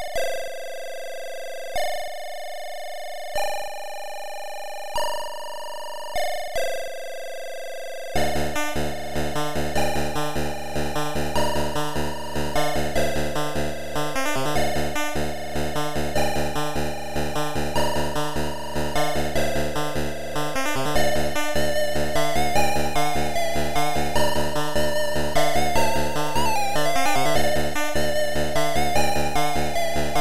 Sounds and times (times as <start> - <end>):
Music: 0.0 - 30.2.